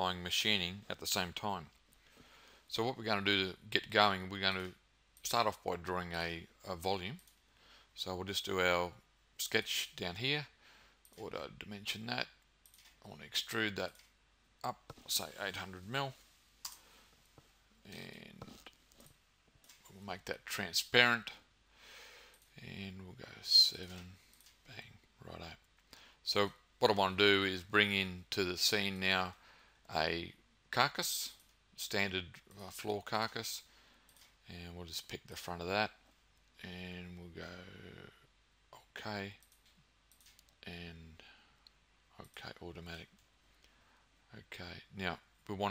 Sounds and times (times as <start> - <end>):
Speech: 0.0 - 1.7, 2.7 - 7.2, 8.0 - 10.6, 11.2 - 12.4, 13.1 - 14.0, 14.6 - 16.2, 17.8 - 18.7, 19.9 - 21.4, 22.6 - 25.6, 26.2 - 33.7, 34.4 - 36.0, 36.6 - 39.4, 40.6 - 41.2, 42.2 - 43.1, 44.3 - 45.7.